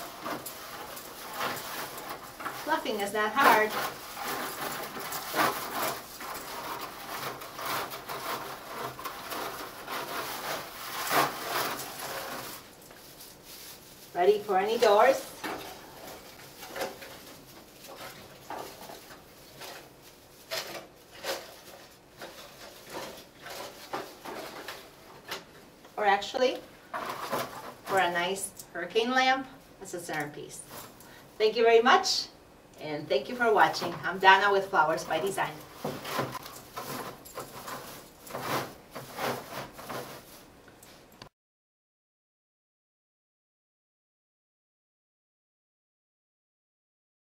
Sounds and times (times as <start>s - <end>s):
Speech: 2.6s - 3.9s, 14.2s - 15.4s, 26.0s - 26.7s, 27.9s - 30.7s, 31.4s - 35.7s.